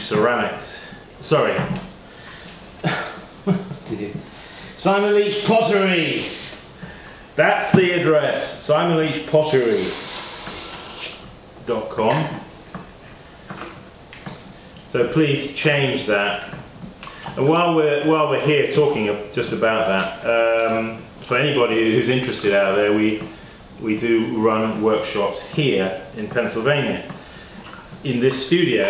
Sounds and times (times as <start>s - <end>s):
Speech: 0.0s - 1.8s, 3.8s - 6.4s, 7.4s - 10.0s, 11.6s - 12.5s, 14.9s - 16.6s, 17.4s - 27.2s, 28.0s - 28.8s.